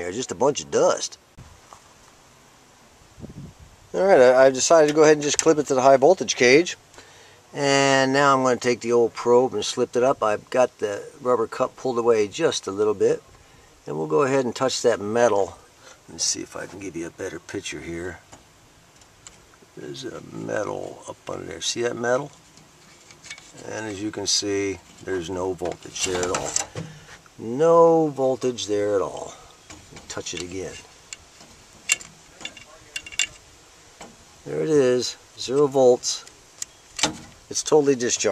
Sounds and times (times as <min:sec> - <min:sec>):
Speech: 0:00.0 - 0:01.2, 0:03.9 - 0:06.8, 0:07.5 - 0:13.2, 0:13.9 - 0:18.2, 0:19.8 - 0:22.4, 0:23.5 - 0:26.6, 0:27.4 - 0:30.9, 0:32.3 - 0:33.4, 0:34.4 - 0:36.3, 0:37.5 - 0:38.3.